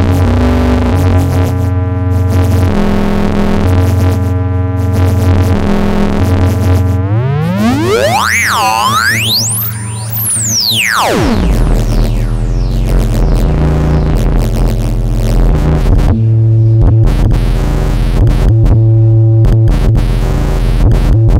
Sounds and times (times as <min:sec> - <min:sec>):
Synthesizer: 0:06.5 - 0:18.7.